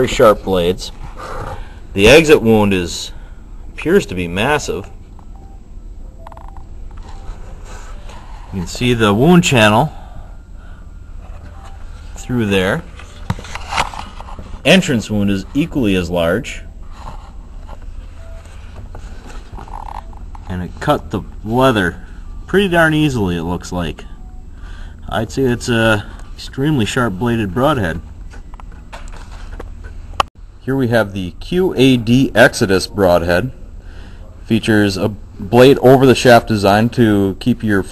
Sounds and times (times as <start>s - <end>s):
Speech: 0.0s - 1.0s, 2.0s - 3.2s, 3.8s - 4.9s, 8.5s - 10.0s, 12.2s - 12.9s, 14.6s - 16.7s, 20.5s - 24.1s, 25.1s - 28.0s, 30.6s - 33.6s, 34.2s - 37.9s.